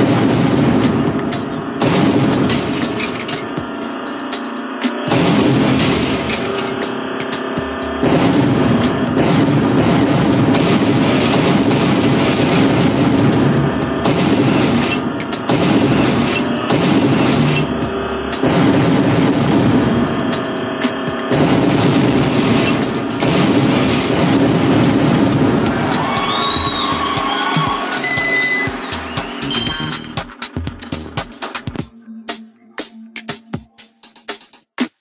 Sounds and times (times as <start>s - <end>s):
Music: 0.0s - 35.0s.